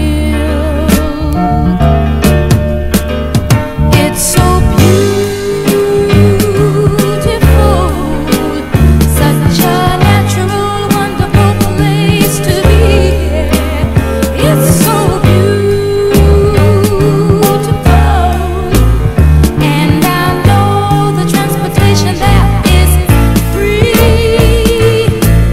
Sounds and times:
Soul music: 0.0 - 25.5.

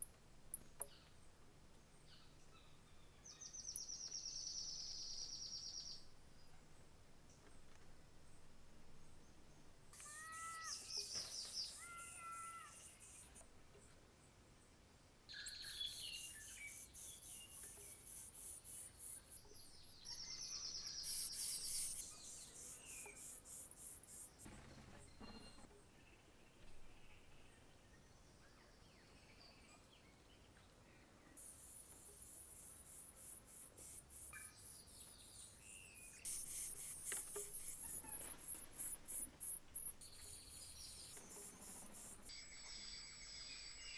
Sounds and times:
Insect: 0.0 - 13.5, 15.3 - 28.2, 31.4 - 43.9.

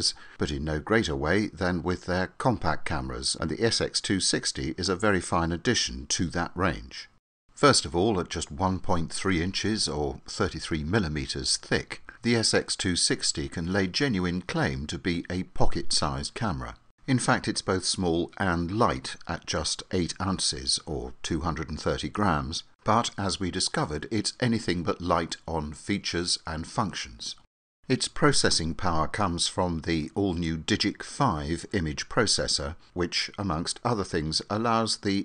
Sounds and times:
Speech: 0.0 - 35.2.

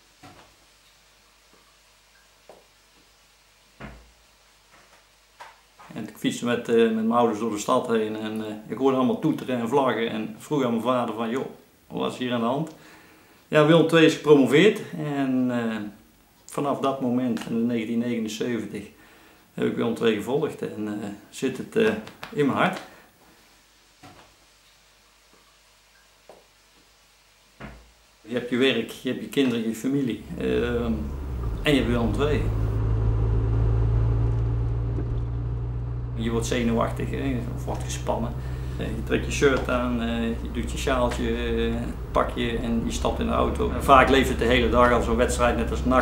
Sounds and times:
Speech: 5.9 - 12.8, 13.5 - 19.0, 19.6 - 22.9, 28.3 - 32.6, 36.2 - 46.0
Car: 30.2 - 46.0.

